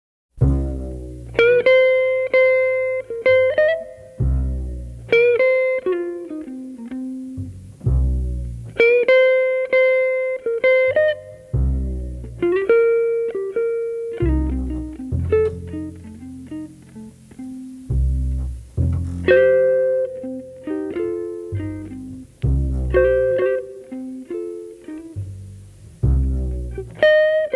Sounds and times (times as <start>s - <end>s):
Music: 0.4s - 27.5s.